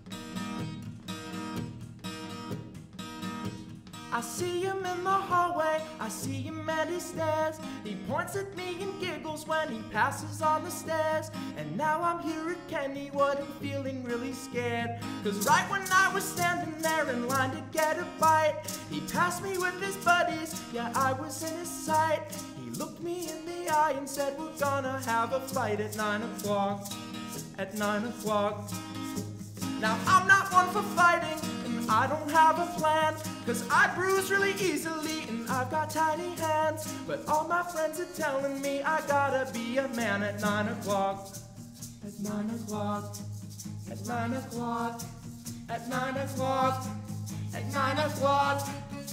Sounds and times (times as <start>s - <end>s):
Music: 0.0s - 49.1s.